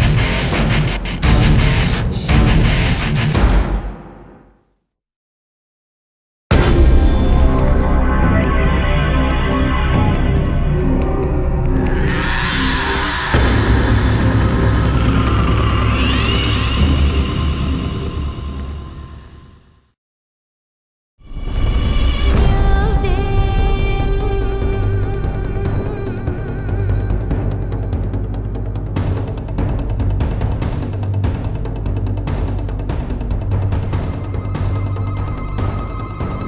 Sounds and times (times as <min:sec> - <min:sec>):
Music: 0:00.0 - 0:04.8, 0:06.5 - 0:19.9, 0:21.2 - 0:36.4.